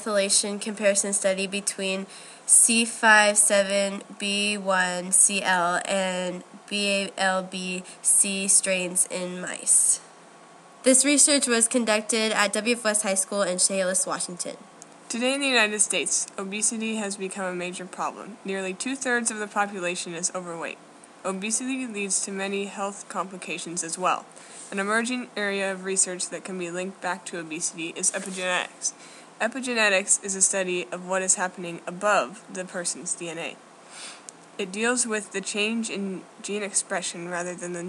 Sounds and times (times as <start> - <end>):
Speech: 0.0 - 10.1, 10.9 - 33.6, 34.6 - 37.8.